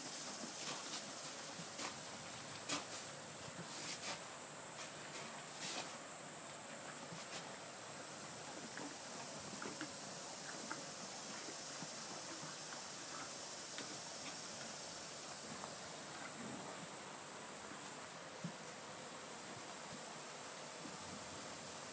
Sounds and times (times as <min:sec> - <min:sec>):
Outside, rural or natural: 0:00.0 - 0:21.9.